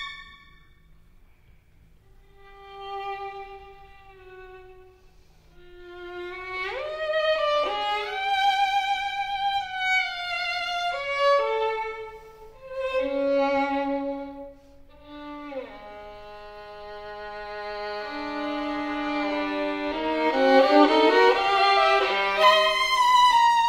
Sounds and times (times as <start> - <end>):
Violin, fiddle: 0.0 - 0.7, 2.2 - 23.6.